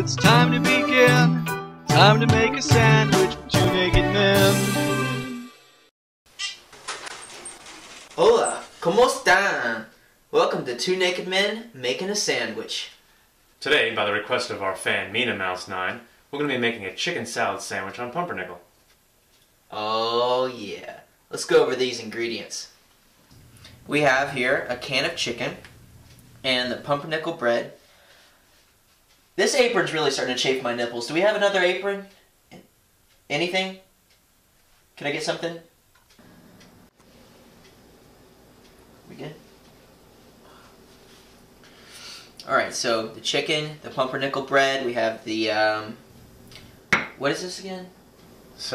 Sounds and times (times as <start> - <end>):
Speech: 8.2 - 13.0, 13.6 - 18.7, 19.7 - 22.8, 23.9 - 25.6, 26.4 - 27.8, 29.4 - 32.7, 33.3 - 33.9, 35.0 - 35.7, 39.1 - 39.4, 42.4 - 46.0, 47.2 - 48.0.